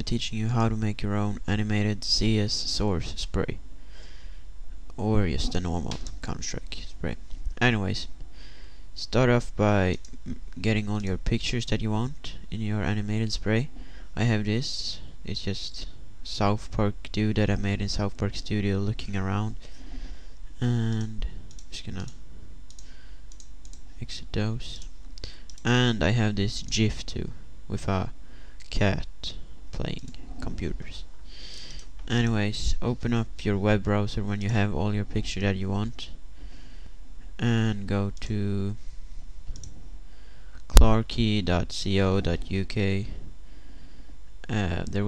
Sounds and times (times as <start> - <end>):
Speech: 0.0 - 3.6, 5.0 - 8.2, 9.0 - 19.6, 20.6 - 22.2, 24.0 - 24.9, 25.6 - 31.1, 32.1 - 36.2, 37.4 - 38.8, 40.7 - 43.2, 44.4 - 45.0.